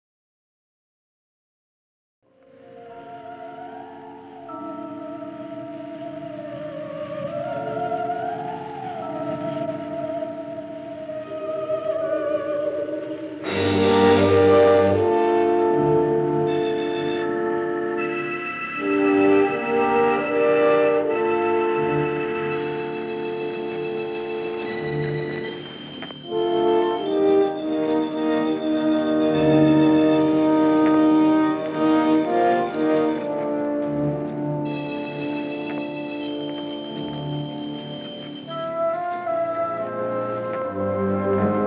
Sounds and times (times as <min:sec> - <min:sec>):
Music: 0:02.2 - 0:41.6.